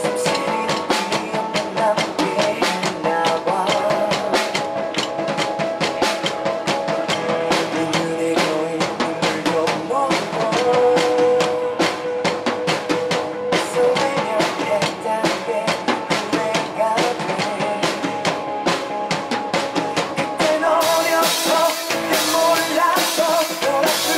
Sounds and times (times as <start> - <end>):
Bass drum: 0.0 - 24.1
Drum kit: 0.0 - 24.1.